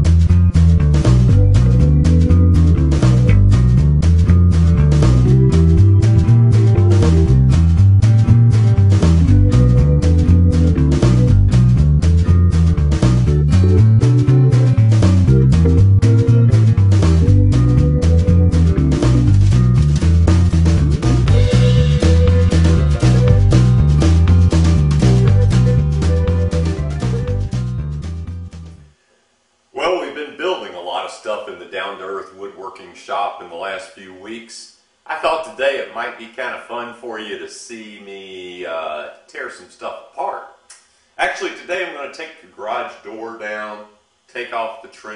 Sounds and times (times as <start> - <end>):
Music: 0.0 - 29.0
Speech: 29.8 - 40.6, 41.2 - 45.1.